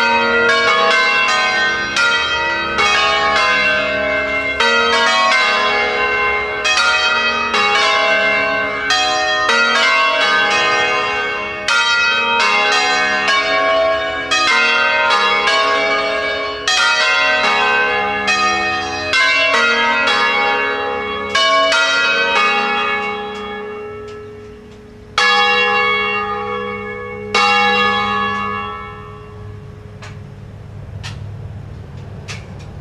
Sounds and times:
Bell: 0.0s - 30.5s.

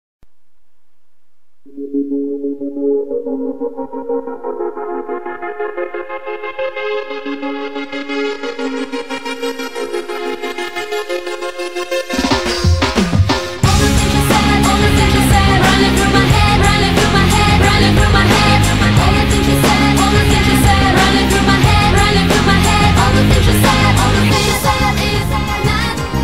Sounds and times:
Music: 0.7s - 26.2s.

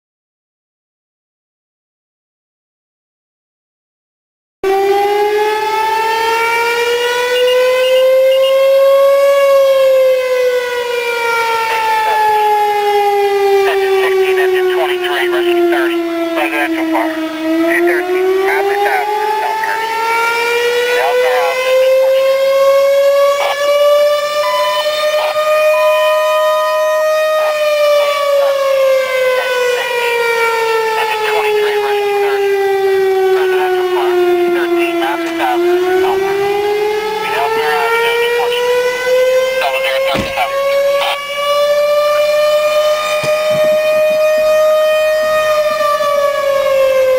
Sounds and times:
Civil defense siren: 4.6s - 47.1s.

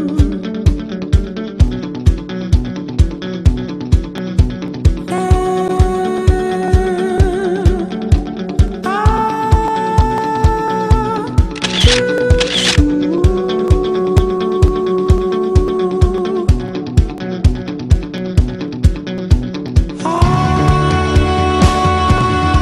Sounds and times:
Music: 0.0s - 22.6s
Single-lens reflex camera: 11.6s - 12.8s.

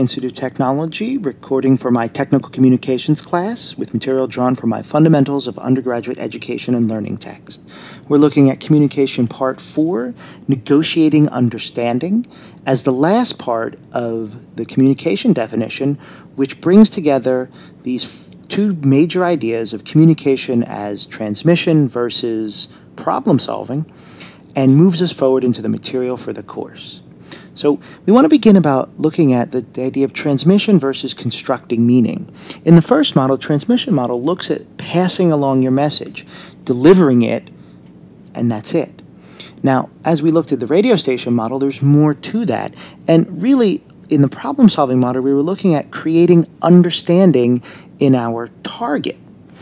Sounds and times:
Speech: 0.0s - 23.9s, 24.6s - 37.6s, 38.4s - 39.0s, 39.6s - 49.2s.

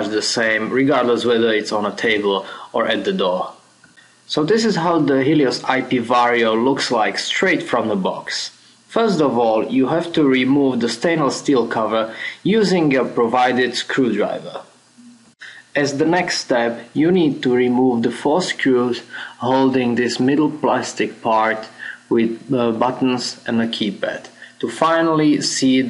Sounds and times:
Speech: 0.0s - 3.6s, 4.3s - 14.7s, 15.4s - 25.8s.

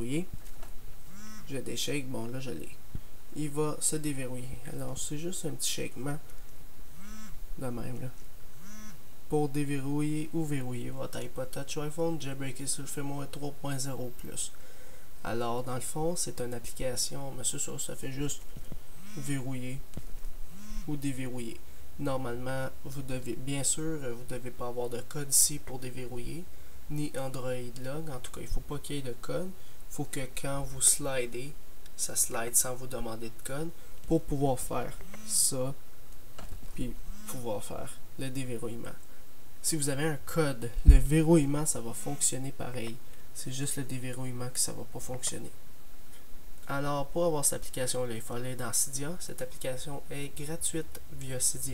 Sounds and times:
Speech: 0.0s - 0.4s, 1.5s - 2.8s, 3.4s - 6.3s, 7.6s - 8.2s, 9.3s - 14.6s, 15.2s - 18.4s, 19.1s - 19.8s, 20.9s - 35.8s, 36.8s - 39.0s, 39.6s - 45.6s, 46.6s - 51.7s.

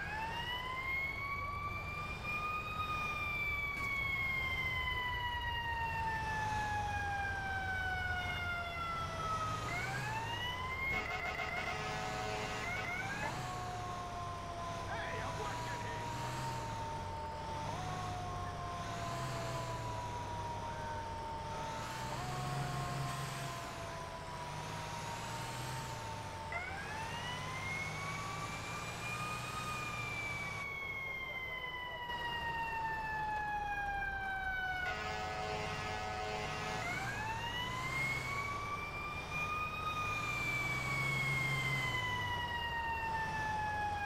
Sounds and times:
Speech: 14.9s - 16.1s.

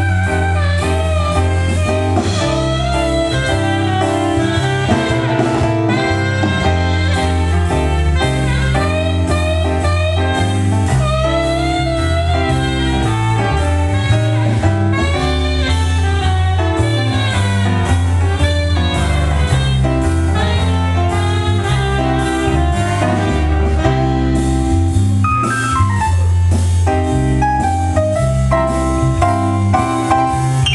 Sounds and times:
Blues: 0.0s - 30.7s.

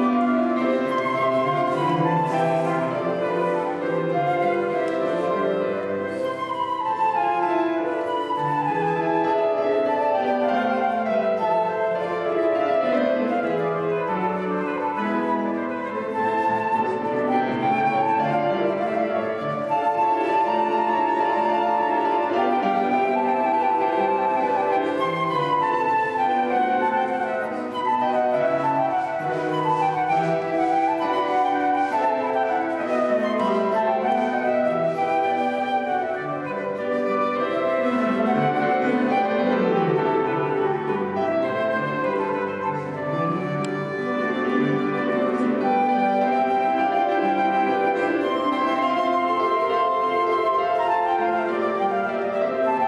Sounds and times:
Flute: 0.0s - 52.8s.

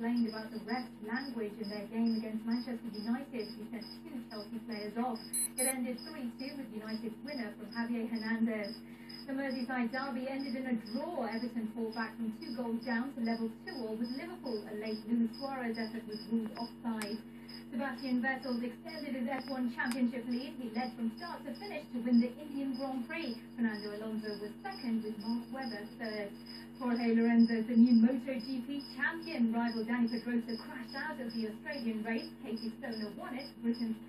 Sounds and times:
Speech: 0.0s - 34.0s.

